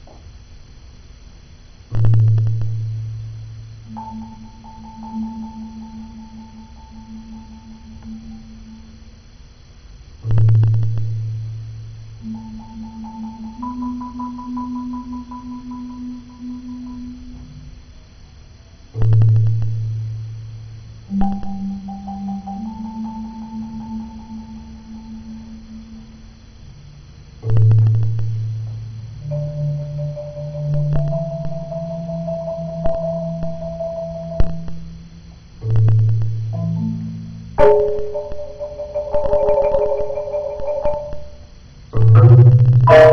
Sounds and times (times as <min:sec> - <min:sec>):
Music: 0:01.9 - 0:09.5, 0:10.1 - 0:43.1.